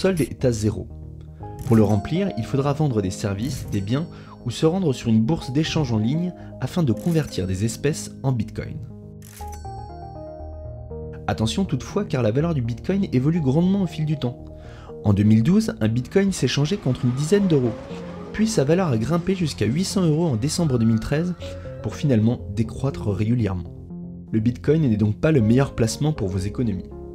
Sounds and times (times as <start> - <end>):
Speech: 0.0 - 0.9, 1.6 - 8.9, 11.3 - 14.4, 15.0 - 23.7, 24.3 - 26.9
Music: 0.0 - 27.1.